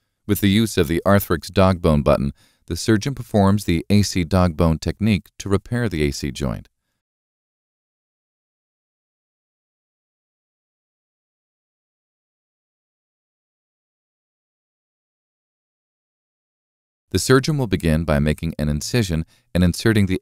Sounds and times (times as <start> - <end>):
Speech: 0.3 - 6.7, 17.2 - 20.2.